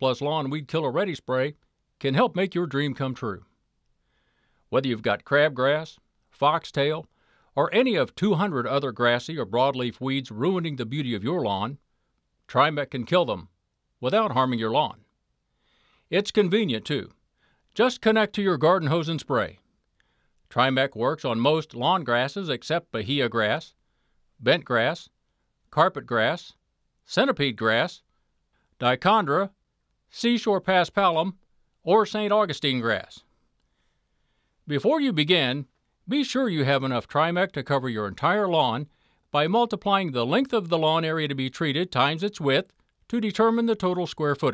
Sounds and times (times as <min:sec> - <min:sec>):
Speech: 0:00.0 - 0:03.5, 0:04.7 - 0:11.8, 0:12.5 - 0:15.1, 0:16.1 - 0:17.2, 0:17.8 - 0:19.6, 0:20.5 - 0:23.8, 0:24.4 - 0:28.1, 0:28.8 - 0:33.3, 0:34.7 - 0:44.5.